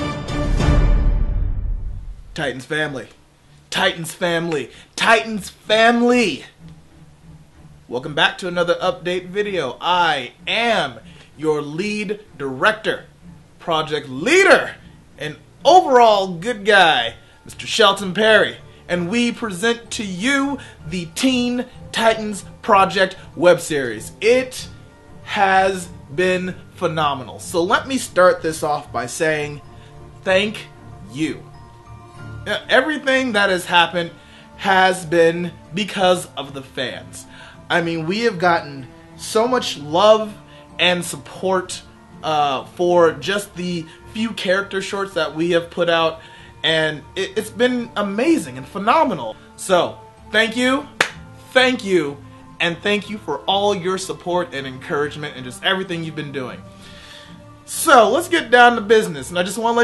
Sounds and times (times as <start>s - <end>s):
Music: 0.0s - 59.8s
Speech: 2.4s - 6.6s, 7.9s - 24.7s, 25.3s - 29.6s, 30.2s - 31.5s, 32.5s - 50.9s, 51.5s - 56.6s, 57.7s - 59.8s.